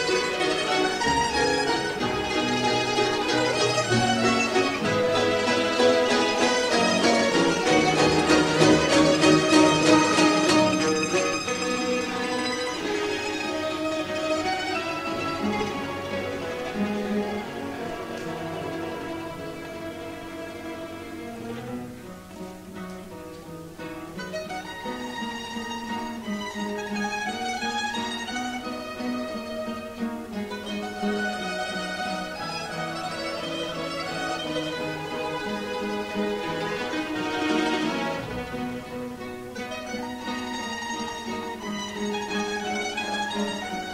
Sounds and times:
Mandolin: 0.0s - 43.9s.

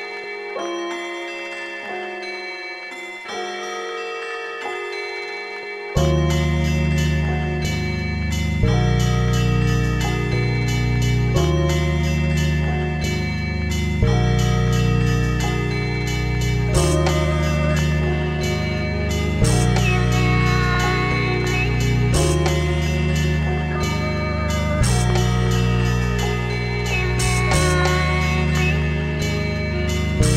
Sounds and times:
Music: 0.0s - 30.3s.

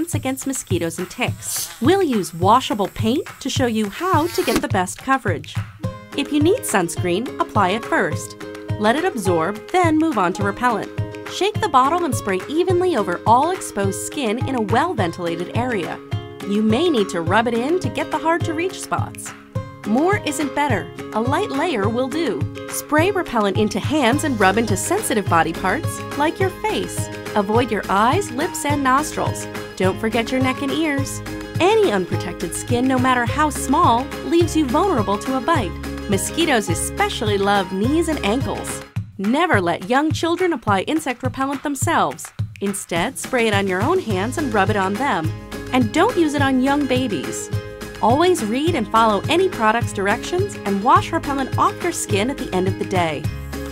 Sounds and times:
Speech: 0.0s - 5.6s, 6.2s - 19.3s, 19.9s - 53.3s
Music: 0.0s - 53.7s.

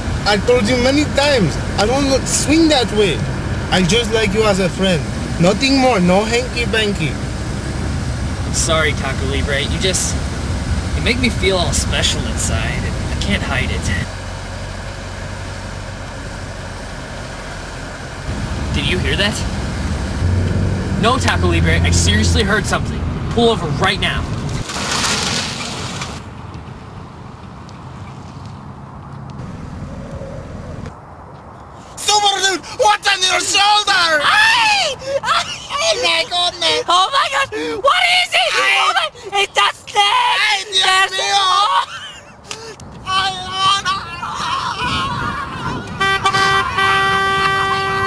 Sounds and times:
Car: 0.0s - 48.0s
Outside, urban or manmade: 0.0s - 48.0s
Speech: 0.3s - 7.2s, 8.6s - 10.2s, 11.0s - 14.1s, 18.8s - 19.5s, 21.0s - 24.3s, 32.0s - 41.9s, 43.1s - 44.5s.

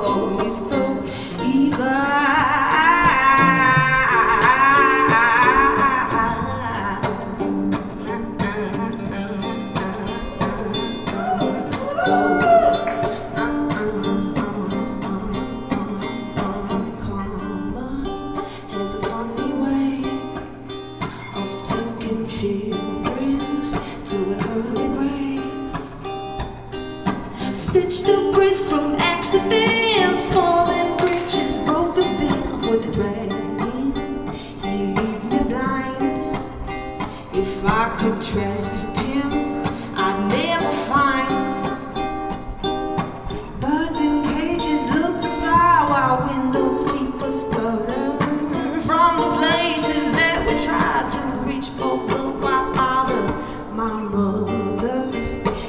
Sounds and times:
Singing: 0.0s - 18.1s
Music: 0.0s - 55.6s.

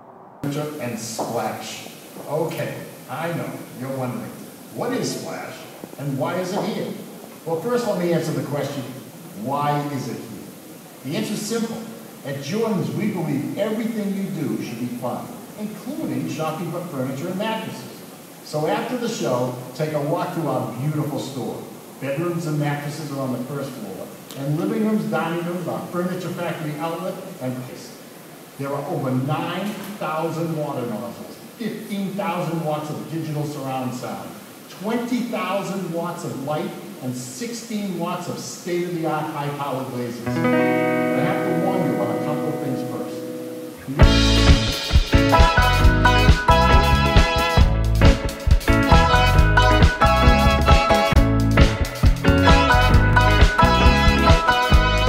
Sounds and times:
Speech: 0.4s - 10.4s, 11.0s - 28.0s, 28.6s - 40.3s, 41.2s - 44.1s.

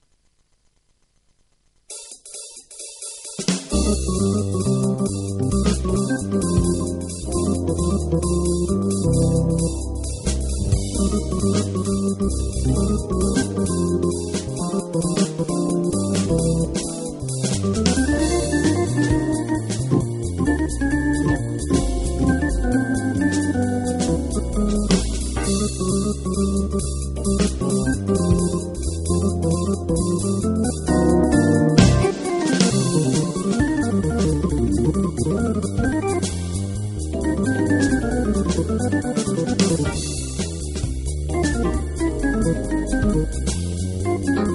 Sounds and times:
Rhythm and blues: 0.8s - 44.5s.

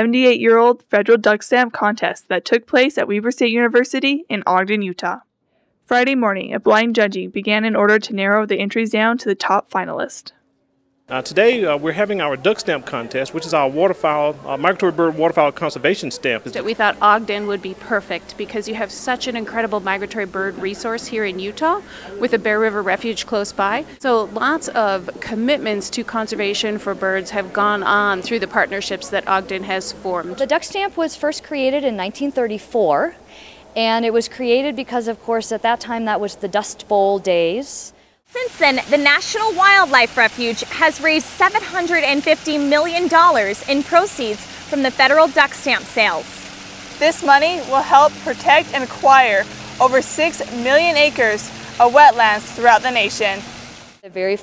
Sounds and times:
Speech: 0.0s - 5.2s, 5.9s - 10.3s, 11.1s - 33.2s, 33.8s - 53.4s, 54.1s - 54.4s.

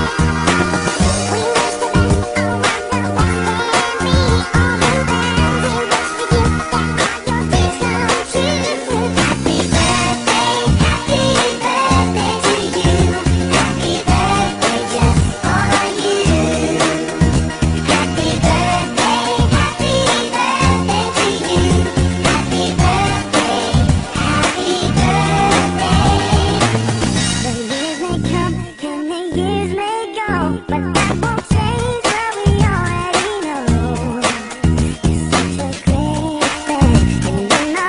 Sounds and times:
Pop music: 0.0s - 37.8s.

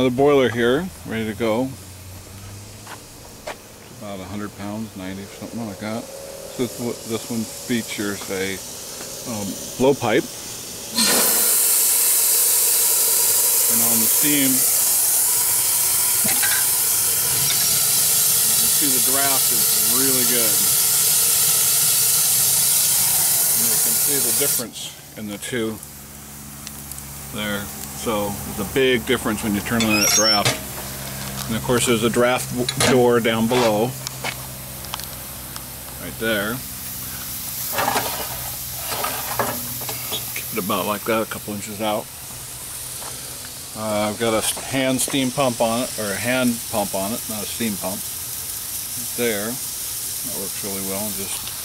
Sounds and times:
Hiss: 1.6s - 51.6s.

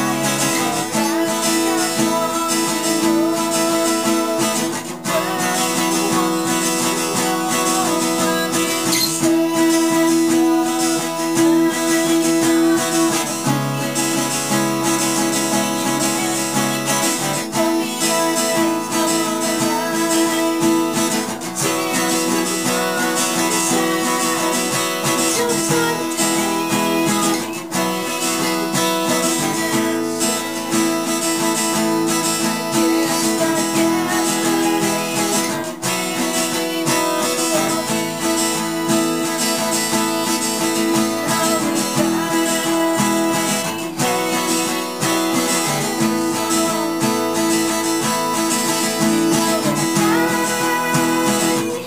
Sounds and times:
Male singing: 0.0s - 51.8s
Music: 0.0s - 51.8s.

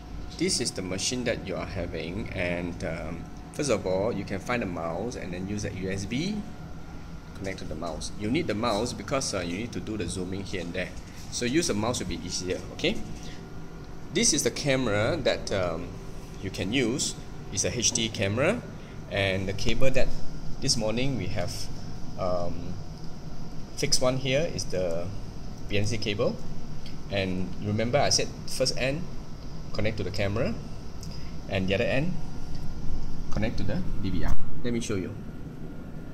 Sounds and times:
Speech: 0.4s - 6.5s, 7.4s - 13.1s, 14.1s - 22.8s, 23.8s - 26.4s, 27.1s - 29.1s, 29.7s - 30.6s, 31.5s - 32.2s, 33.3s - 35.2s.

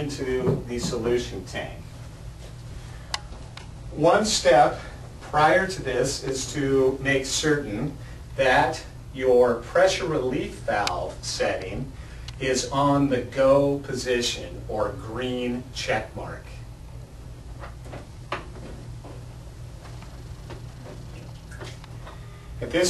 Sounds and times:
Speech: 0.0s - 1.8s, 4.0s - 16.6s, 22.6s - 22.9s.

